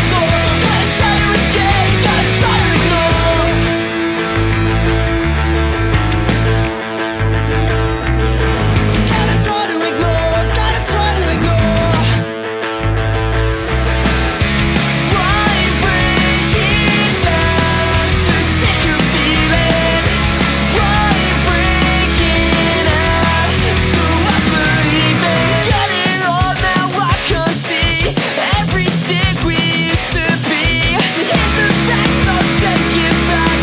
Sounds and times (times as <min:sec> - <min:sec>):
Grunge: 0:00.0 - 0:33.6.